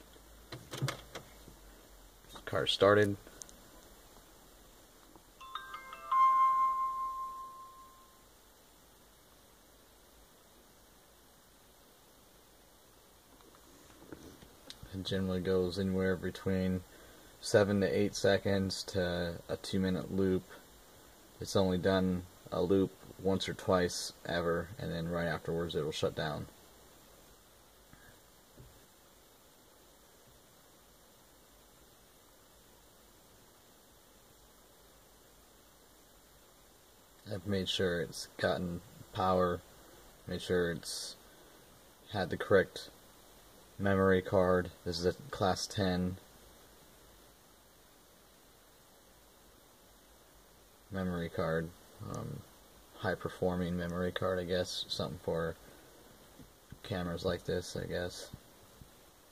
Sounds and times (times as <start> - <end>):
Speech: 2.3 - 3.3, 14.8 - 20.6, 21.4 - 26.5, 37.2 - 39.6, 40.3 - 41.2, 42.1 - 43.0, 43.8 - 46.2, 50.9 - 55.6, 56.7 - 58.4
Music: 5.4 - 8.2.